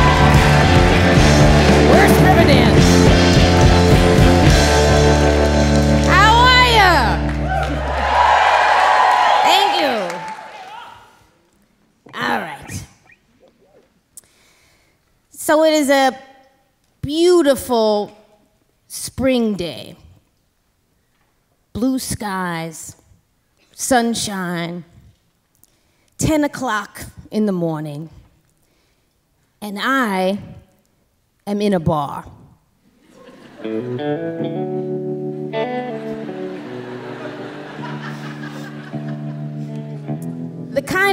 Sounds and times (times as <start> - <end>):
Speech: 12.1 - 13.0.